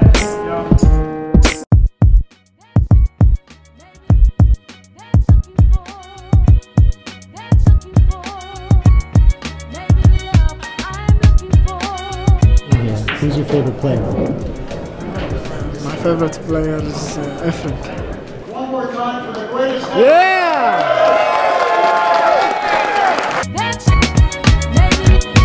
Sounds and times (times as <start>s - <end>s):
Music: 0.0s - 18.4s, 23.4s - 25.4s
Speech: 12.7s - 14.3s, 15.8s - 20.7s.